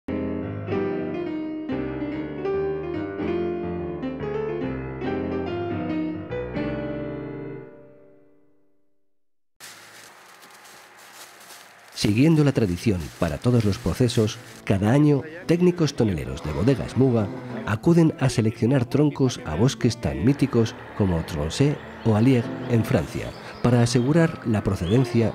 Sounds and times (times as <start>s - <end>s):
Piano: 0.1s - 8.8s, 11.7s - 25.3s.